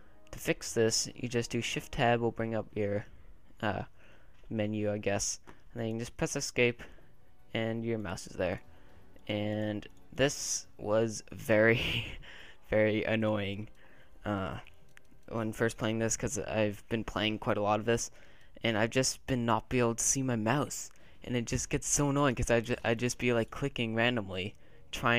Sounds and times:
Speech: 0.3 - 3.9, 4.5 - 6.9, 7.5 - 8.6, 9.3 - 14.7, 15.3 - 25.1.

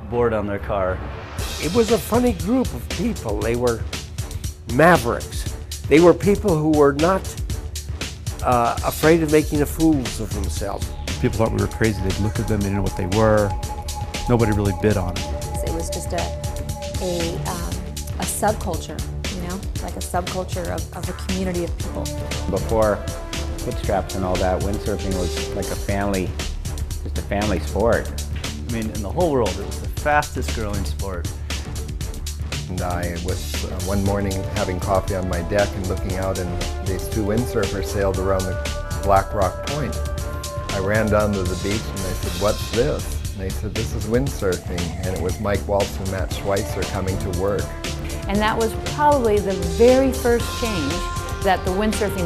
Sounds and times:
Speech: 0.0 - 1.0, 1.6 - 3.8, 4.7 - 7.4, 8.4 - 13.6, 14.3 - 16.3, 17.0 - 23.0, 23.7 - 26.3, 27.1 - 28.1, 28.7 - 31.2, 32.7 - 40.0, 40.7 - 47.7, 48.3 - 52.2
Music: 0.0 - 52.2.

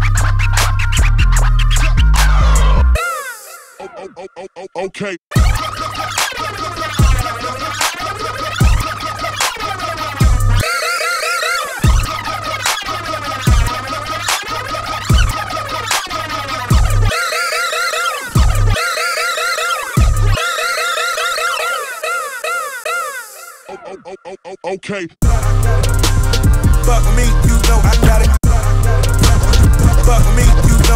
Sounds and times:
Scratching (performance technique): 0.0 - 3.0, 5.3 - 22.0, 25.2 - 30.9
Hip hop music: 0.0 - 30.9
House music: 5.3 - 22.0, 25.2 - 30.9.

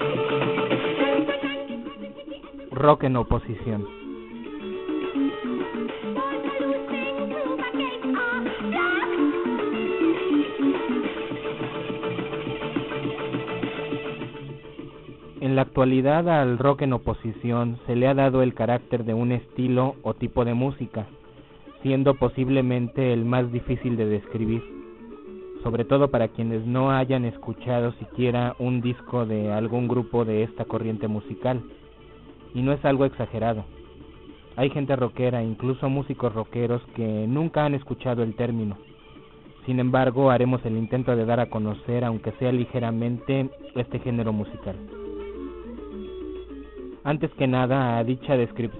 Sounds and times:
Music: 0.0 - 48.7
Radio: 1.7 - 4.6, 14.8 - 48.7
Speech: 2.7 - 3.9, 15.4 - 24.8, 25.6 - 31.7, 32.6 - 33.7, 34.6 - 38.9, 39.6 - 45.0, 47.1 - 48.7.

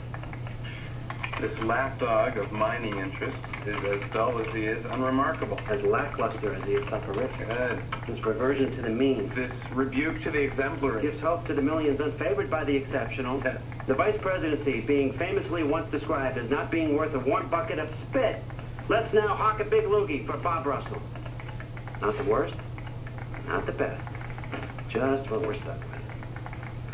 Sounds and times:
Narration, monologue: 0.0 - 26.9
Male speech, man speaking: 1.4 - 21.1, 22.0 - 22.6, 23.4 - 24.0, 24.9 - 26.0.

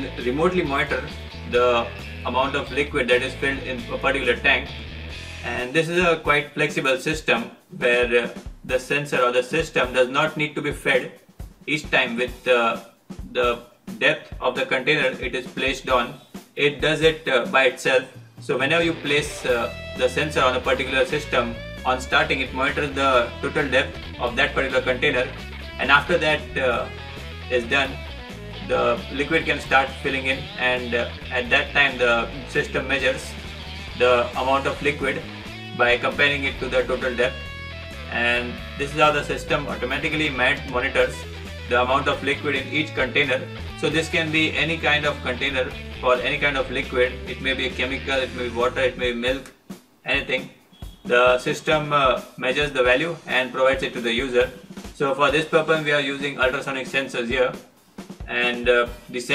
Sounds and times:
Speech: 0.0 - 4.8, 5.4 - 26.9, 27.5 - 28.0, 28.6 - 33.4, 34.0 - 37.4, 38.1 - 59.3
Music: 0.0 - 59.3.

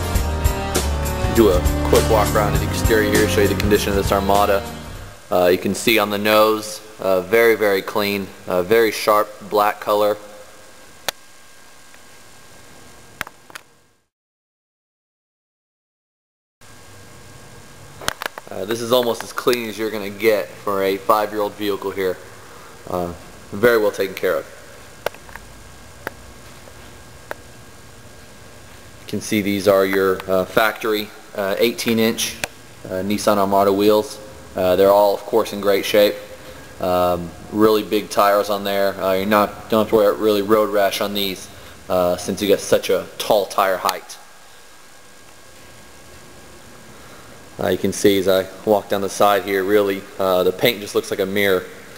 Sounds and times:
Speech: 1.3 - 4.7, 5.3 - 10.4, 18.5 - 22.3, 22.9 - 24.6, 29.1 - 44.3, 47.6 - 51.8.

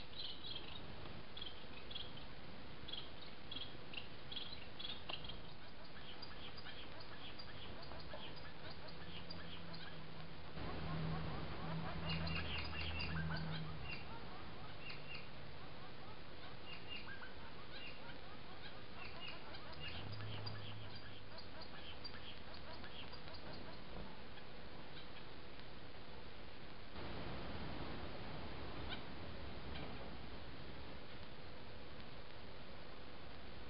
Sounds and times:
Bird: 0.0 - 25.4, 28.8 - 30.2.

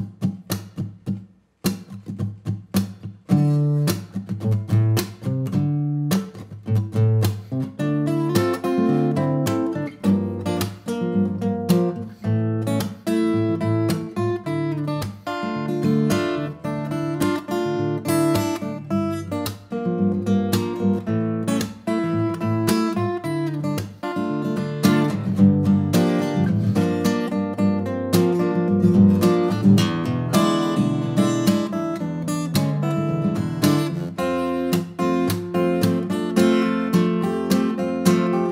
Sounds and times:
Acoustic guitar: 0.0 - 38.5.

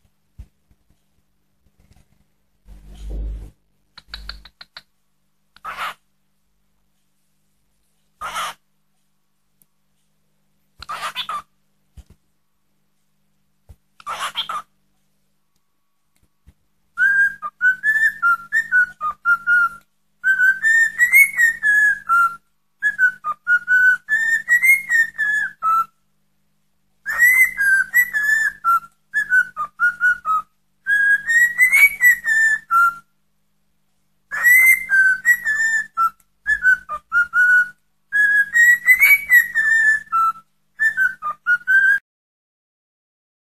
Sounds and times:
Whistling: 17.0 - 25.9, 27.1 - 33.1, 34.3 - 42.0.

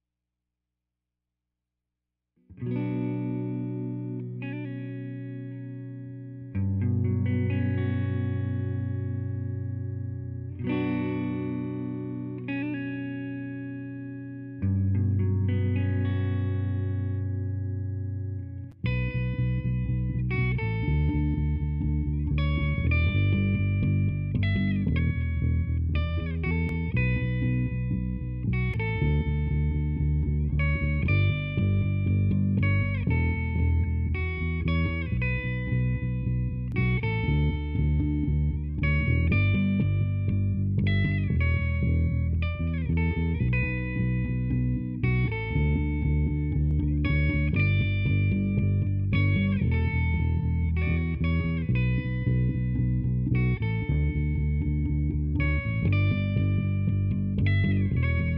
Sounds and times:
Bass guitar: 2.5 - 58.3
Electric guitar: 2.5 - 58.3.

